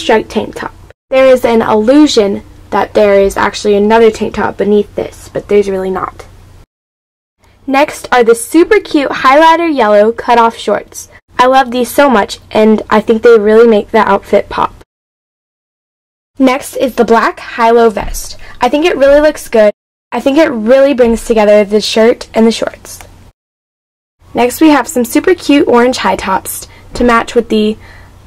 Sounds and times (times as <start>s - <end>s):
Speech: 0.0s - 6.3s, 7.7s - 14.8s, 16.4s - 23.1s, 24.4s - 27.8s.